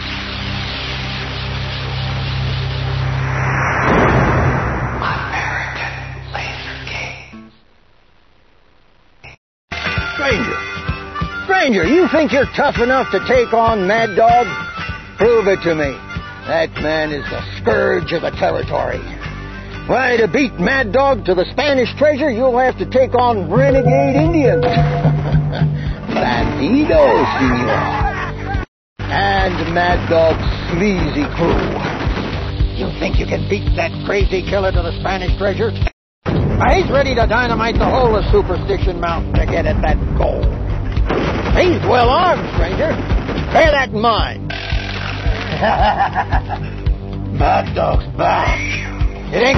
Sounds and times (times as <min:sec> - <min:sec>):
Music: 0:00.0 - 0:03.1, 0:09.7 - 0:35.9, 0:36.7 - 0:49.5
Speech: 0:11.5 - 0:14.5, 0:15.2 - 0:19.1, 0:19.9 - 0:24.7, 0:26.1 - 0:27.8, 0:29.1 - 0:31.6, 0:32.8 - 0:35.9, 0:36.6 - 0:40.5, 0:41.6 - 0:43.0, 0:47.4 - 0:49.5.